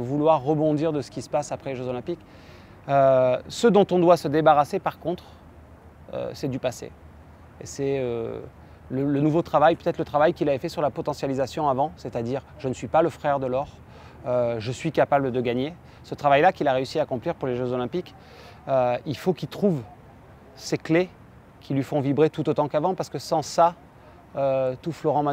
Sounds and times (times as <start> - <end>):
Speech: 0.0 - 2.2, 2.9 - 5.3, 6.1 - 6.9, 7.6 - 25.3.